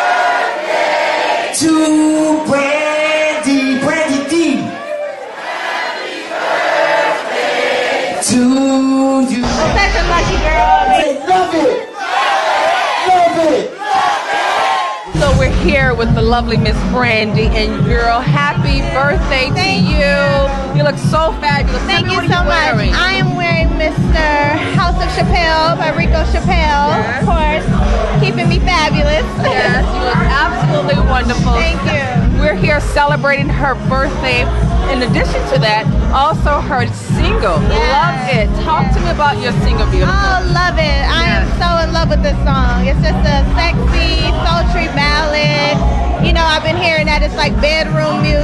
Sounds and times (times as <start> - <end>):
Music: 9.3 - 11.0, 15.1 - 48.4
Speech: 9.4 - 11.8, 15.2 - 48.4.